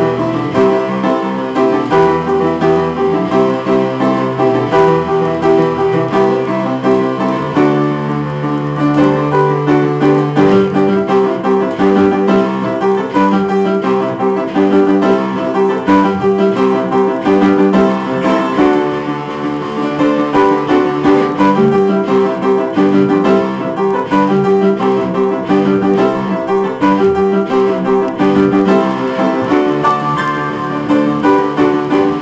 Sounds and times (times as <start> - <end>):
Guitar: 0.0 - 32.2.